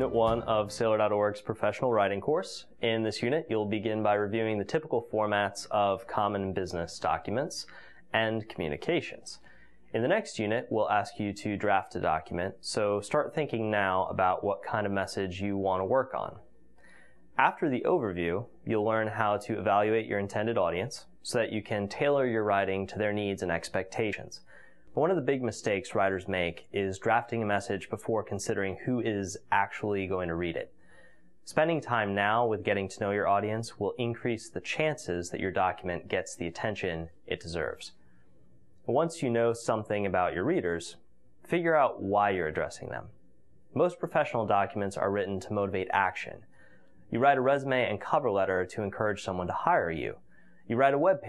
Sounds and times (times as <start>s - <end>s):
Speech: 0.0s - 16.5s, 17.4s - 30.7s, 31.4s - 38.0s, 38.8s - 46.5s, 47.1s - 51.2s.